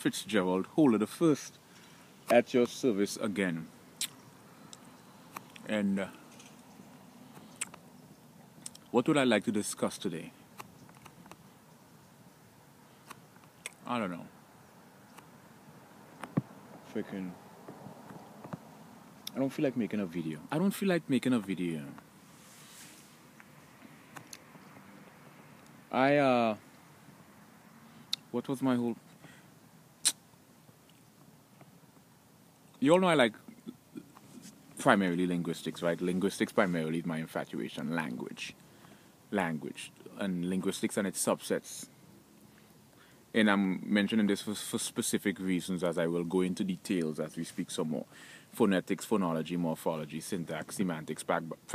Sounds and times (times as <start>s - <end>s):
Speech: 0.0s - 1.6s, 2.3s - 3.7s, 5.6s - 6.2s, 8.9s - 10.4s, 13.8s - 14.3s, 16.9s - 17.4s, 19.3s - 22.0s, 25.9s - 26.6s, 28.3s - 29.0s, 32.8s - 33.8s, 34.8s - 38.6s, 39.3s - 41.9s, 43.4s - 51.7s.